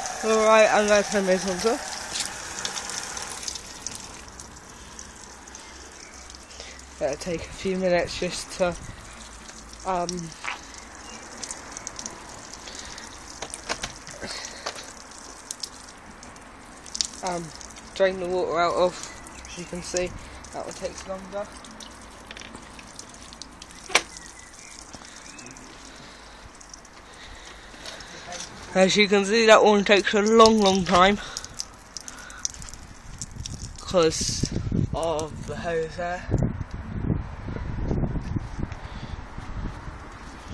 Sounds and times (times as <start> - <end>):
Outside, urban or manmade: 0.0 - 40.5.